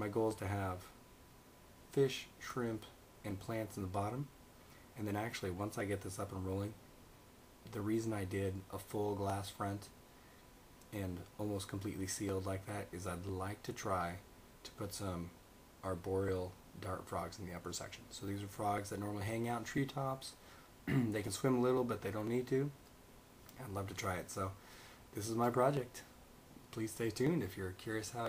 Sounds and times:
Speech: 0.0 - 1.0, 1.9 - 4.4, 5.0 - 6.8, 7.6 - 10.0, 10.9 - 22.8, 23.5 - 28.2
Inside, small room: 0.0 - 28.2.

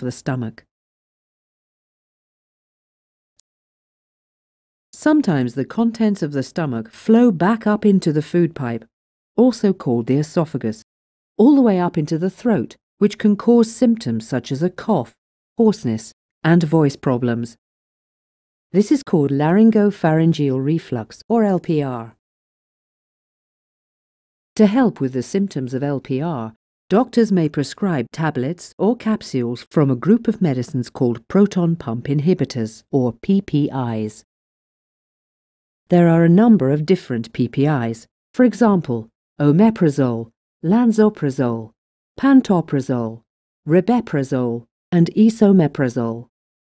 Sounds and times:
Speech: 0.0 - 0.7, 5.0 - 10.8, 11.4 - 17.6, 18.8 - 22.2, 24.6 - 34.3, 35.9 - 46.3.

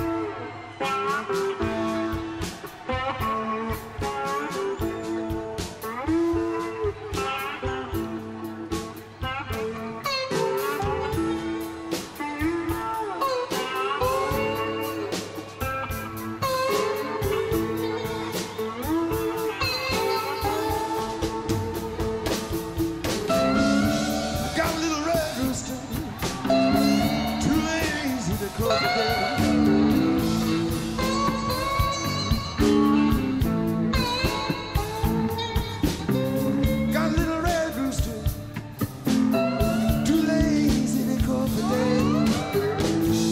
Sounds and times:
Music: 0.0 - 43.3.

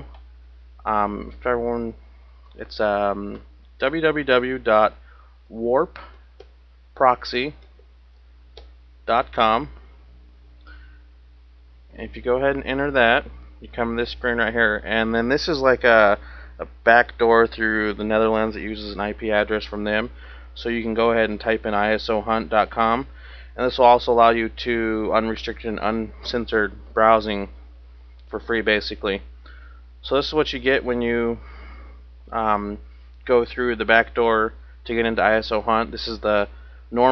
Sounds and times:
Speech: 0.8 - 2.0, 2.6 - 6.2, 7.0 - 7.6, 9.1 - 9.8, 12.0 - 27.6, 28.3 - 29.3, 30.0 - 31.4, 32.3 - 37.1.

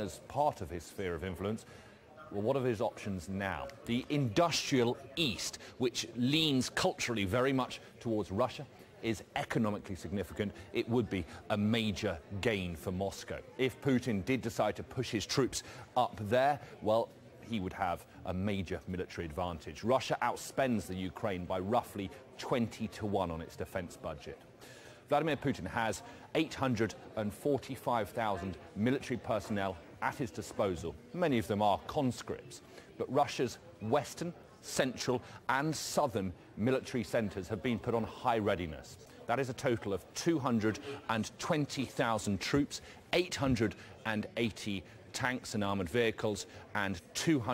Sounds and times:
Speech: 0.0 - 47.5.

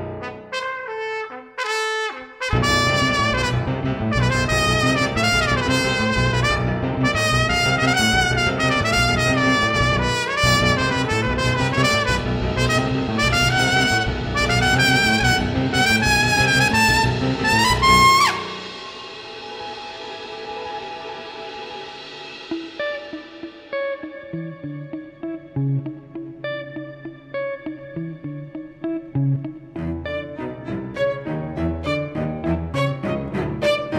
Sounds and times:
Orchestra: 0.0 - 23.5, 29.8 - 33.9.

